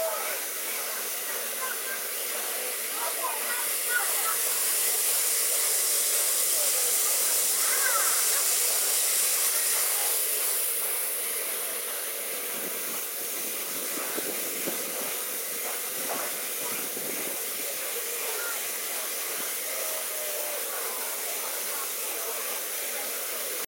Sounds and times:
Hiss: 0:00.0 - 0:23.6.

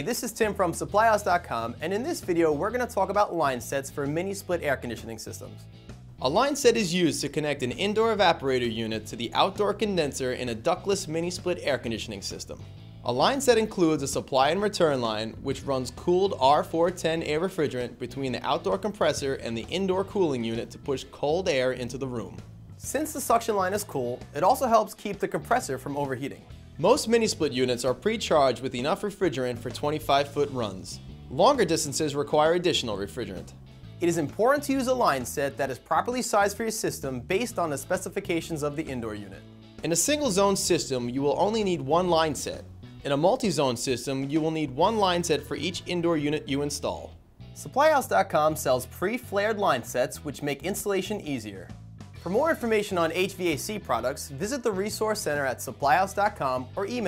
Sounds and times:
Speech: 0:00.0 - 0:05.6, 0:06.2 - 0:57.0
Music: 0:00.0 - 0:57.0.

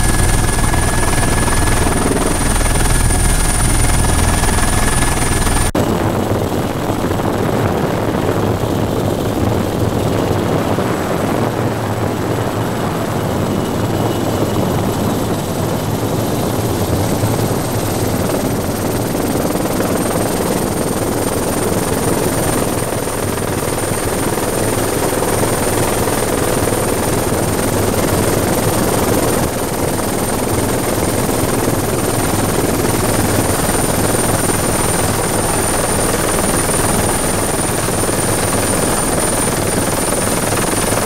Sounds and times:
Helicopter: 0:00.0 - 0:41.0.

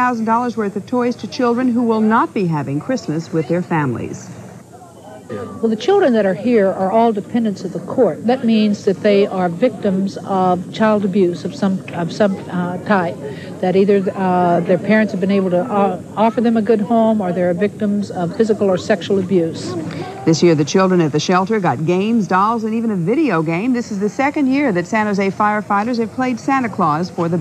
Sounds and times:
Speech: 0:00.0 - 0:04.4, 0:05.2 - 0:27.4.

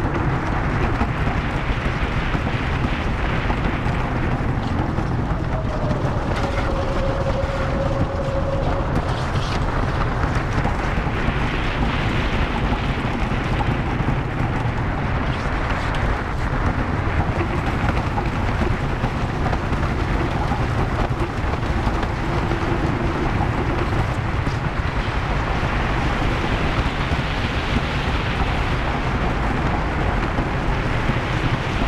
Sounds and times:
Outside, rural or natural: 0:00.0 - 0:31.8.

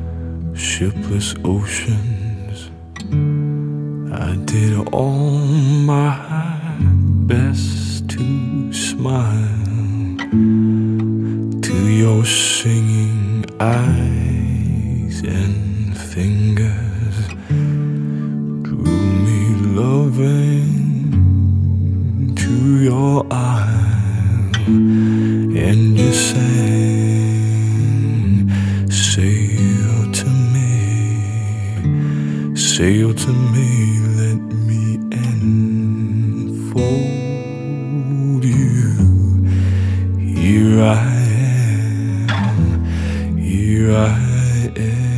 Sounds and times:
Music: 0:00.0 - 0:45.1.

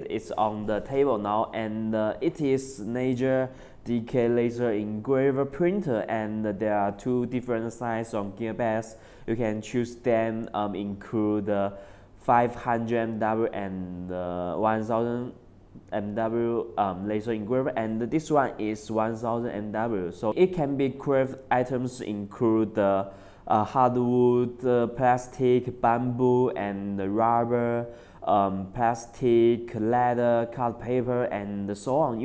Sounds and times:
Speech: 0:00.0 - 0:32.2.

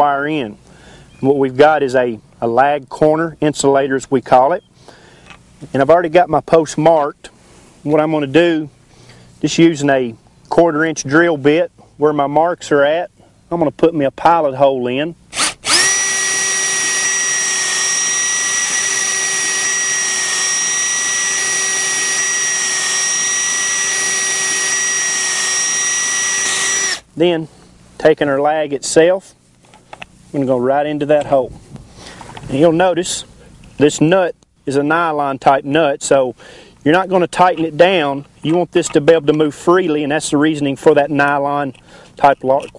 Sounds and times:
Speech: 0:00.0 - 0:00.6, 0:01.2 - 0:04.6, 0:05.6 - 0:08.7, 0:09.4 - 0:15.2, 0:27.2 - 0:29.4, 0:30.3 - 0:31.6, 0:32.5 - 0:42.7.

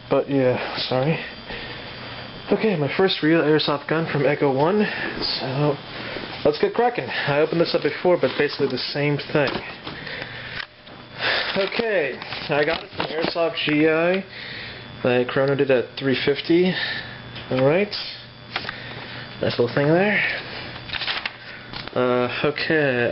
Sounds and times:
Speech: 0:00.1 - 0:01.3, 0:02.5 - 0:05.8, 0:06.4 - 0:09.7, 0:11.6 - 0:14.3, 0:15.0 - 0:16.8, 0:17.5 - 0:18.2, 0:19.4 - 0:20.4, 0:22.0 - 0:23.1.

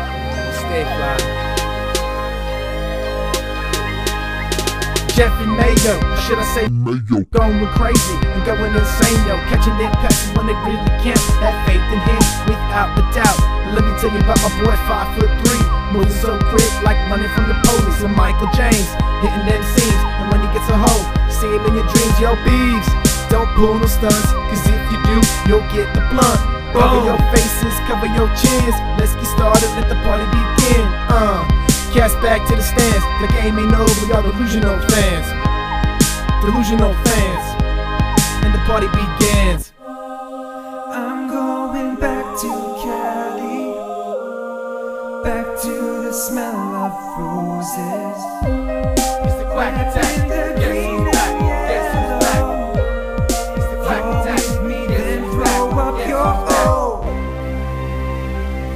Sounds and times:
Music: 0:00.0 - 0:06.7, 0:07.4 - 0:58.7.

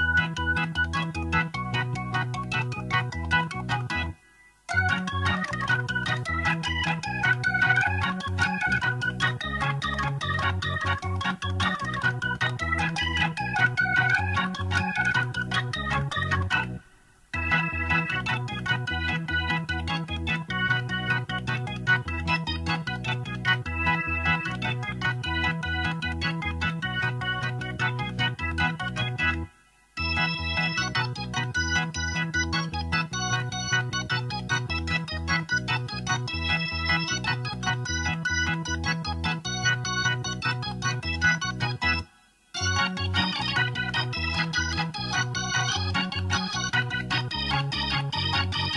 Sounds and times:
Piano: 0:00.0 - 0:48.7.

